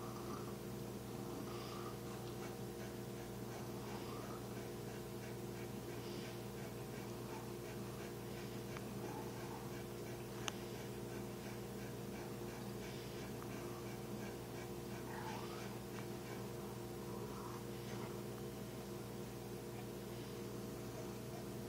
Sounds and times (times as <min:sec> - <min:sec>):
Domestic animals, pets: 0:01.2 - 0:21.6.